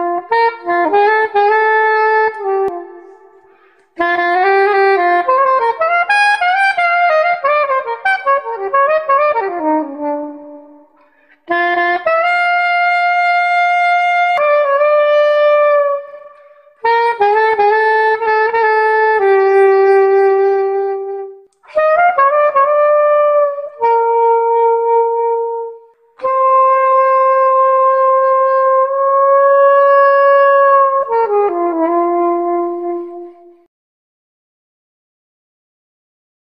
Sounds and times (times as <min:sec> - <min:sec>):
Music: 0:00.0 - 0:33.7.